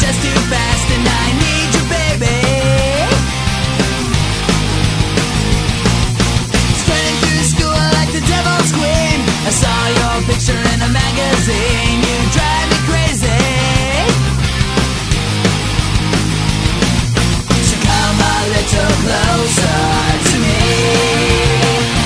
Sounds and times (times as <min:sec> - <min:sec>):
Music: 0:00.0 - 0:22.0.